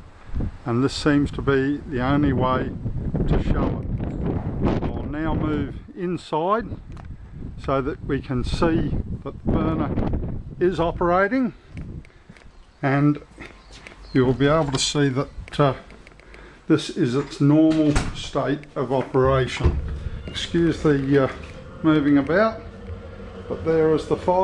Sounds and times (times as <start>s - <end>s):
Speech: 0.7s - 3.8s, 4.8s - 6.8s, 7.6s - 10.0s, 10.6s - 11.6s, 12.8s - 13.3s, 14.2s - 15.9s, 16.7s - 22.8s, 23.5s - 24.4s.